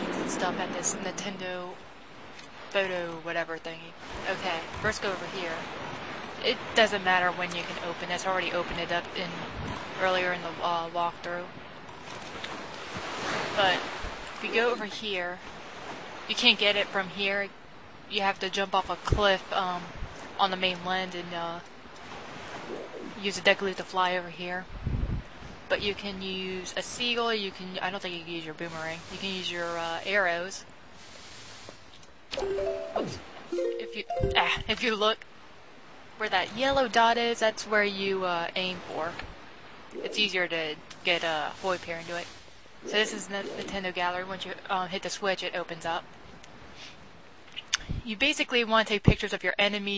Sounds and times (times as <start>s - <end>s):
Speech: 0.0s - 1.8s, 2.7s - 5.7s, 6.4s - 11.5s, 13.5s - 15.5s, 16.3s - 17.5s, 18.1s - 21.6s, 23.2s - 24.7s, 25.7s - 30.6s, 32.4s - 35.2s, 36.2s - 39.2s, 40.0s - 42.3s, 42.9s - 46.0s, 47.6s - 49.9s.